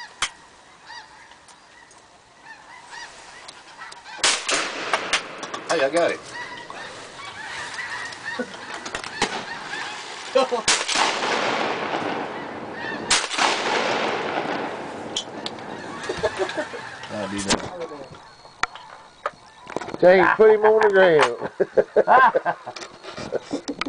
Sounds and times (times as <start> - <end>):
Honk: 0.0 - 4.7, 5.7 - 10.9, 12.0 - 13.7, 14.5 - 22.5.